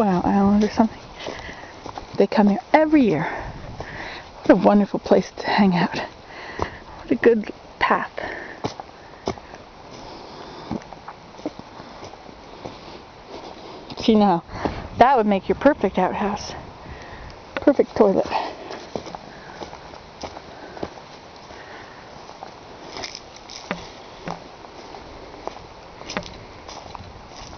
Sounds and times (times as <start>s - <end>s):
Speech: 0.0s - 0.9s, 2.2s - 3.3s, 4.5s - 6.1s, 7.1s - 8.2s, 14.0s - 16.6s, 17.6s - 18.5s
Outside, rural or natural: 0.0s - 27.5s.